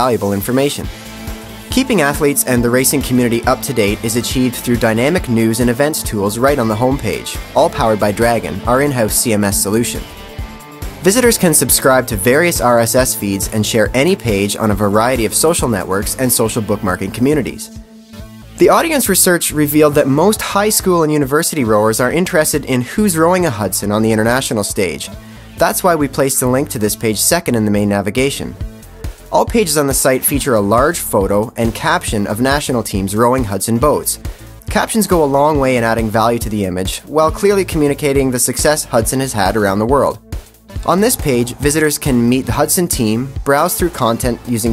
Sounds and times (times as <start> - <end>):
Speech: 0.0 - 0.9, 1.7 - 10.1, 11.0 - 17.7, 18.6 - 28.6, 29.3 - 40.2, 40.8 - 44.7
Music: 0.0 - 44.7.